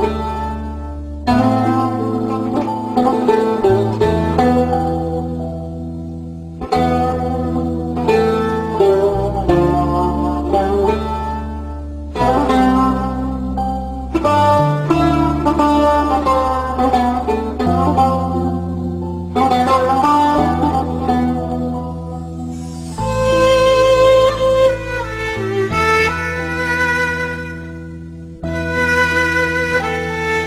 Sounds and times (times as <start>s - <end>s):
Sad music: 0.0s - 30.4s.